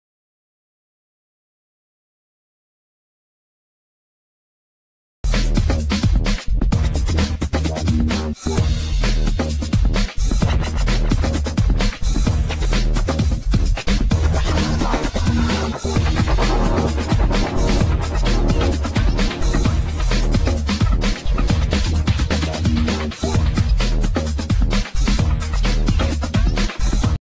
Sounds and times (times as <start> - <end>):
Music: 5.2 - 27.2.